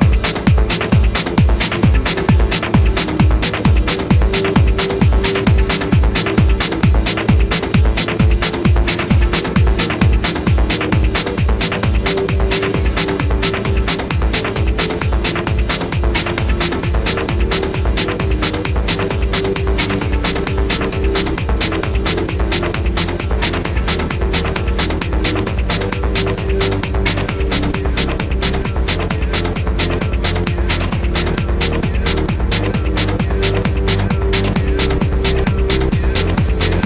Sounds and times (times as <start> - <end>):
Music: 0.0 - 36.8.